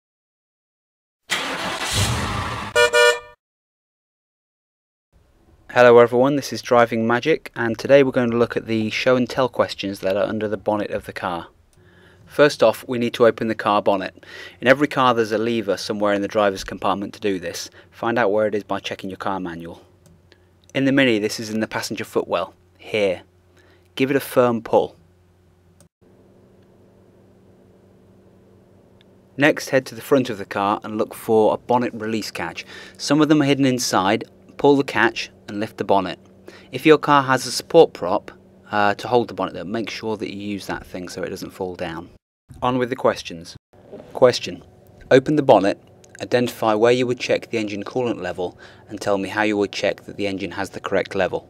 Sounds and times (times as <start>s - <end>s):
Vehicle: 1.3s - 3.3s.